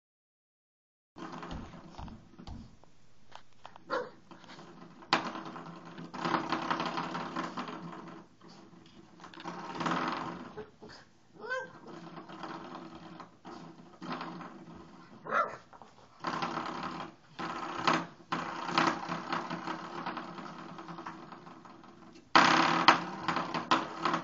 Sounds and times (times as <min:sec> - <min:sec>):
Canidae, dogs, wolves: 0:03.9 - 0:04.2, 0:15.2 - 0:15.7
Dog: 0:03.9 - 0:04.2, 0:15.2 - 0:15.7.